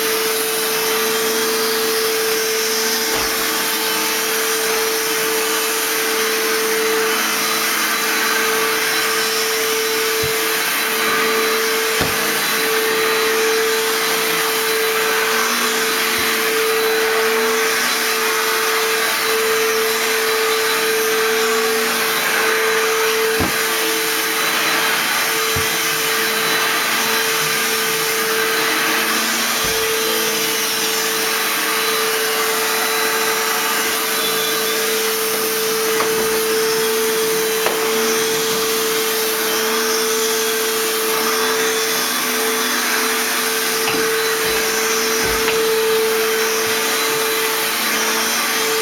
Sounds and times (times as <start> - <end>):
Vacuum cleaner: 0.0 - 48.8.